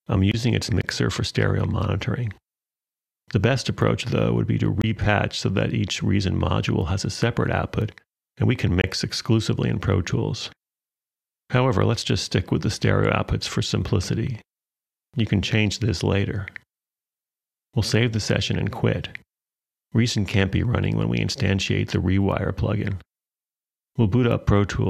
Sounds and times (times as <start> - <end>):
Speech: 0.0 - 2.4, 3.3 - 10.6, 11.5 - 14.5, 15.2 - 16.6, 17.8 - 19.3, 19.9 - 23.1, 24.0 - 24.8.